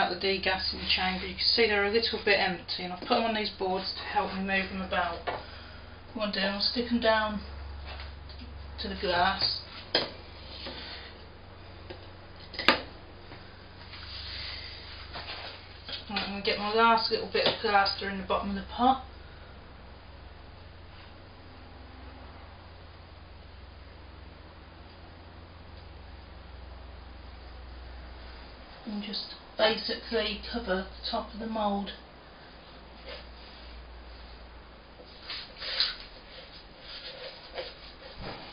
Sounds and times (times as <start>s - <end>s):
Speech: 0.0s - 5.3s, 6.2s - 7.5s, 8.8s - 9.7s, 16.1s - 19.1s, 28.9s - 32.0s.